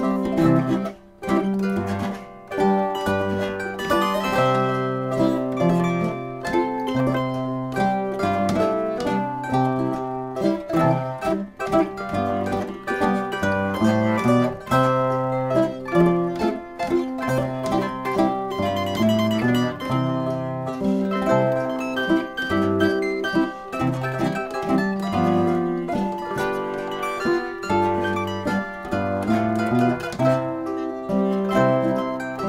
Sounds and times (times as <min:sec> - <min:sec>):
Pizzicato: 0:00.0 - 0:32.4
Zither: 0:00.0 - 0:32.4.